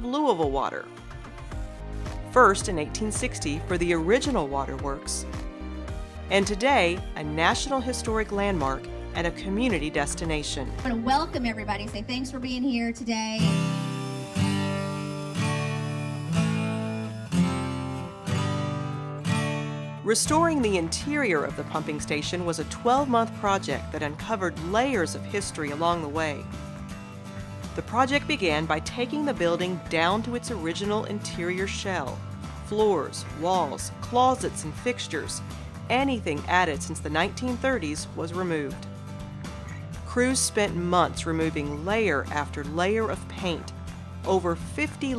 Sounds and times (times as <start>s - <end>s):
Speech: 0.0s - 0.8s, 6.3s - 13.5s, 20.1s - 26.4s, 27.8s - 38.8s, 40.1s - 43.7s, 44.3s - 45.1s
Music: 0.0s - 45.1s.